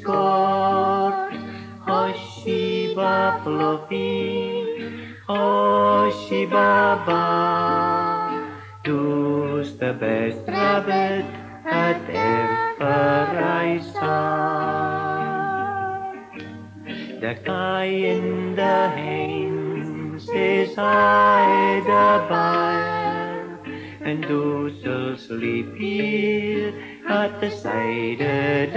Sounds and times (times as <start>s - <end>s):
Lullaby: 0.0s - 28.7s.